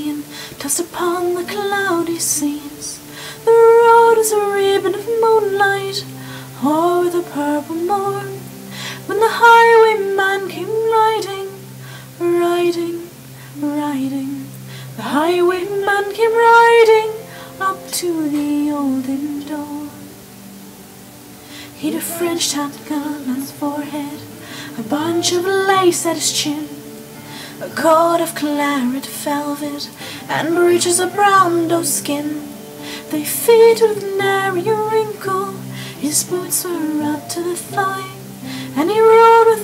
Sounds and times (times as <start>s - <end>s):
Female singing: 0.0s - 20.1s, 21.7s - 27.0s, 27.6s - 39.6s
Music: 0.0s - 39.6s.